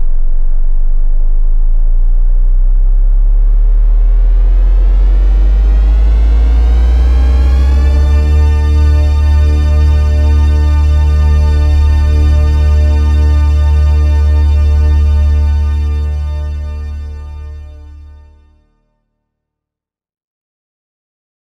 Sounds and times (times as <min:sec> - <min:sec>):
Music: 0:00.0 - 0:19.6.